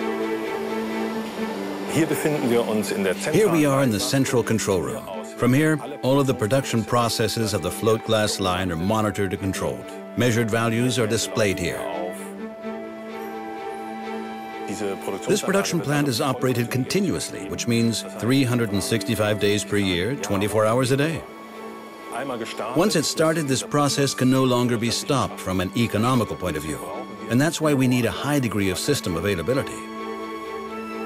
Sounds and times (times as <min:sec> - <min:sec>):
Music: 0:00.0 - 0:31.0
Speech: 0:01.9 - 0:12.3, 0:14.6 - 0:21.2, 0:22.1 - 0:29.8.